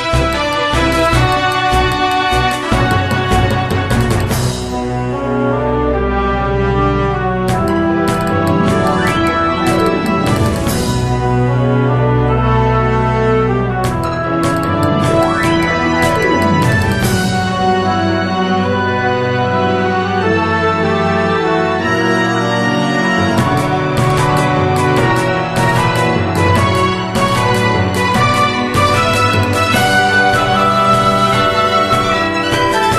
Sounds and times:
Electronic music: 0:07.5 - 0:11.4, 0:13.9 - 0:17.8.

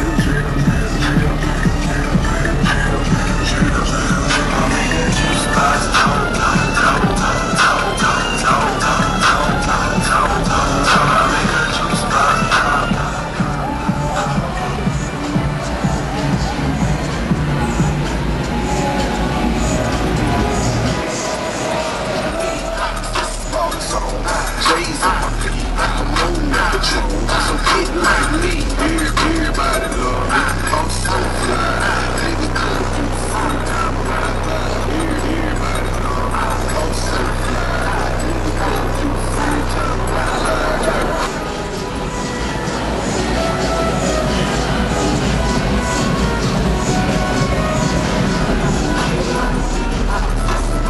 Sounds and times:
Motor vehicle (road): 0:00.0 - 0:50.8
Music: 0:00.0 - 0:50.8.

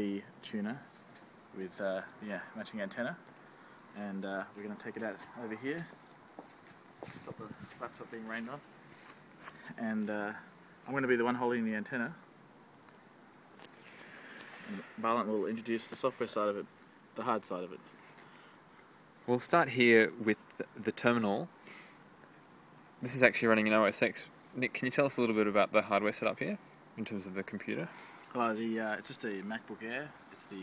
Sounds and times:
Speech: 0:00.0 - 0:00.9, 0:01.6 - 0:03.2, 0:04.0 - 0:05.9, 0:07.2 - 0:08.6, 0:09.8 - 0:12.2, 0:14.7 - 0:17.8, 0:19.3 - 0:21.5, 0:23.0 - 0:30.6.

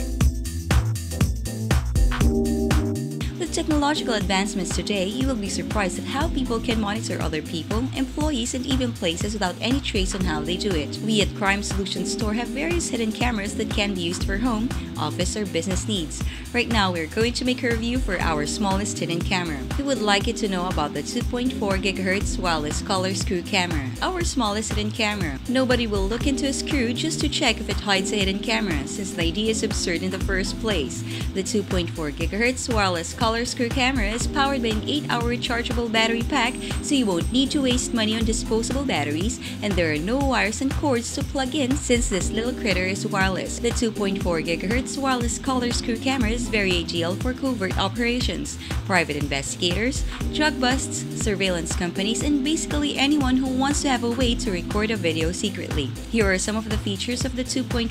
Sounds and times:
Music: 0:00.0 - 0:57.9
Speech: 0:03.2 - 0:57.9.

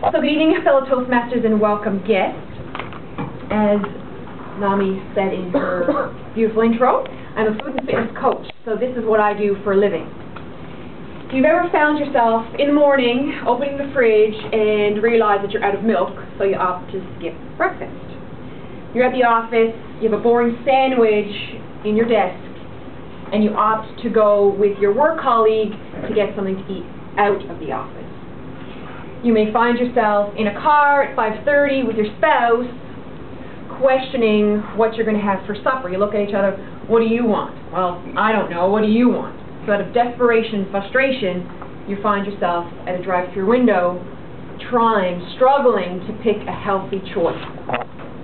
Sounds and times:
Female speech, woman speaking: 0:00.0 - 0:02.4, 0:03.5 - 0:04.0, 0:04.6 - 0:10.1, 0:11.3 - 0:18.2, 0:19.0 - 0:22.5, 0:23.3 - 0:28.1, 0:29.2 - 0:32.8, 0:33.7 - 0:47.4
Narration, monologue: 0:00.0 - 0:48.2.

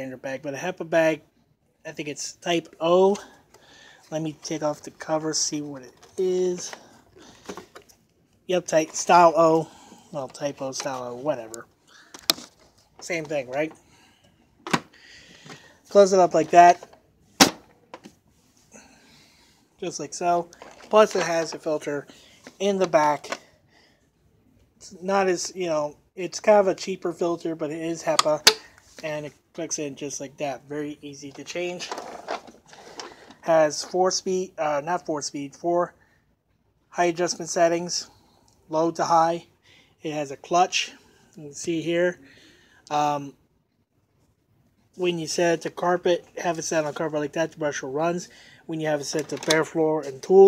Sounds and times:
Speech: 0:00.0 - 0:03.4, 0:04.1 - 0:06.9, 0:08.5 - 0:11.7, 0:13.0 - 0:13.8, 0:15.9 - 0:16.9, 0:19.8 - 0:23.5, 0:24.8 - 0:32.0, 0:33.4 - 0:36.0, 0:36.9 - 0:38.1, 0:38.7 - 0:42.2, 0:42.9 - 0:43.4, 0:44.9 - 0:50.4.

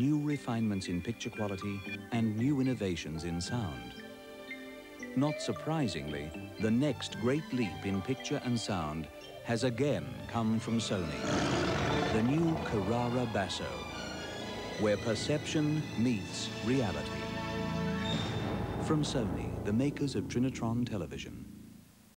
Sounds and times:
Speech: 0:00.0 - 0:04.0, 0:05.2 - 0:13.8, 0:14.8 - 0:17.2, 0:18.8 - 0:21.5
Television: 0:00.0 - 0:18.0
Music: 0:00.0 - 0:22.1.

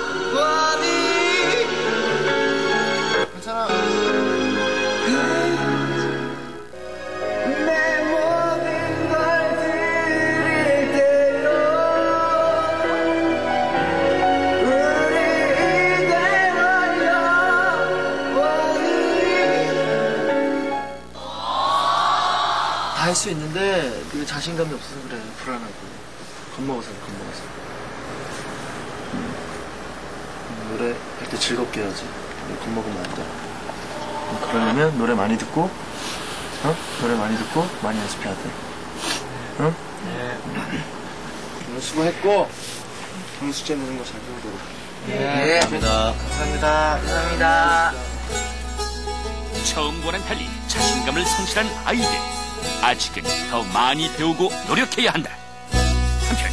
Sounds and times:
Music: 0:00.0 - 0:21.2, 0:45.7 - 0:56.5
Speech: 0:49.7 - 0:52.2, 0:52.8 - 0:55.4.

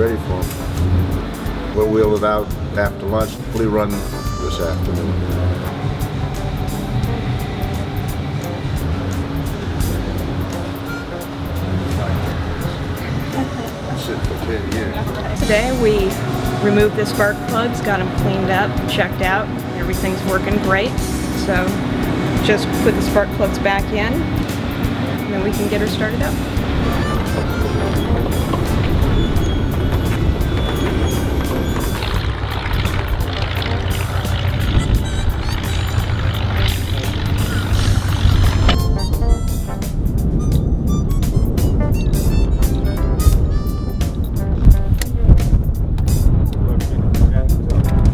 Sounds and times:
Music: 0:00.0 - 0:48.1.

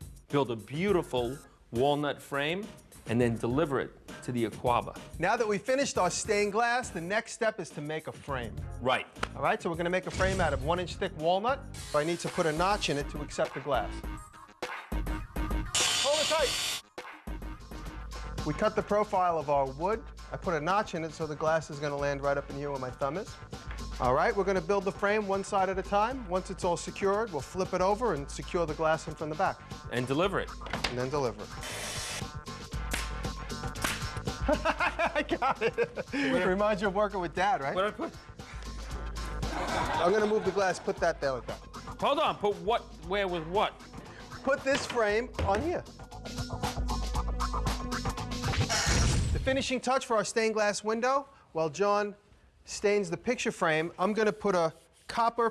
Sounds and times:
Music: 0:00.0 - 0:50.2
Speech: 0:00.3 - 0:14.0, 0:16.0 - 0:16.5, 0:18.5 - 0:23.3, 0:36.2 - 0:38.1, 0:44.4 - 0:45.9, 0:49.4 - 0:55.5.

